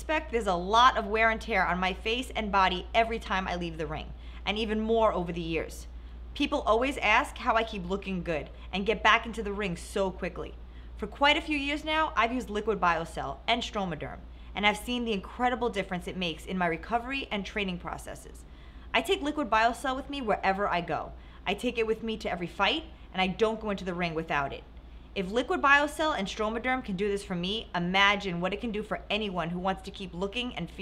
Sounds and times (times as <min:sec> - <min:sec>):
Speech: 0:00.0 - 0:18.4, 0:19.0 - 0:30.8.